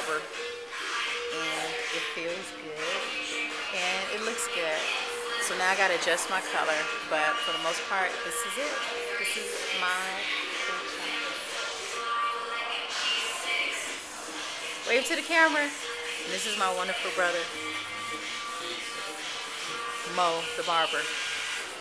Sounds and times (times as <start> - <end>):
Music: 0.0 - 21.8
Speech: 1.4 - 3.1, 3.7 - 4.8, 5.4 - 11.1, 14.9 - 17.5, 20.1 - 21.1.